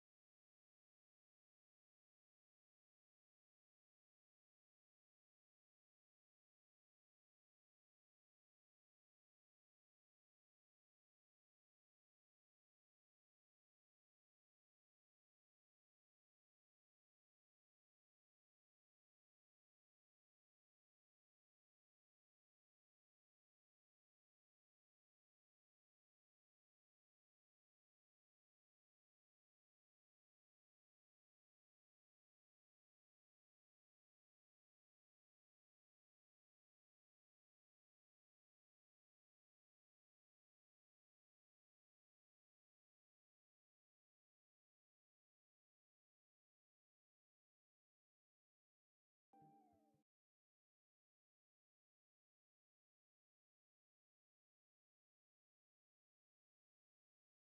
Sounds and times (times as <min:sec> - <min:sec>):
Music: 0:00.0 - 0:57.4.